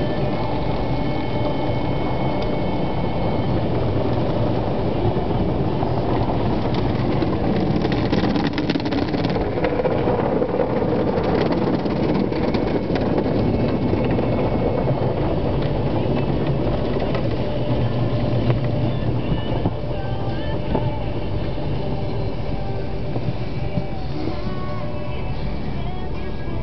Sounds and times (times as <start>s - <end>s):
Car: 0.0s - 26.6s
Music: 0.0s - 26.6s.